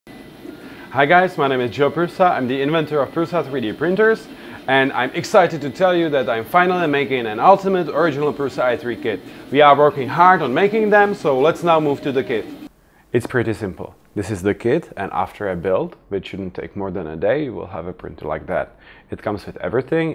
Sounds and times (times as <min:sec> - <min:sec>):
Speech: 0:00.9 - 0:20.1.